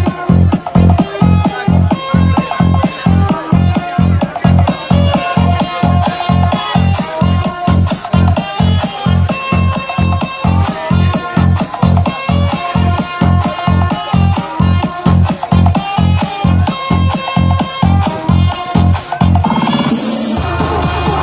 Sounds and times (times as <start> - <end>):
Speech: 0.0 - 15.5
Music: 0.0 - 21.2.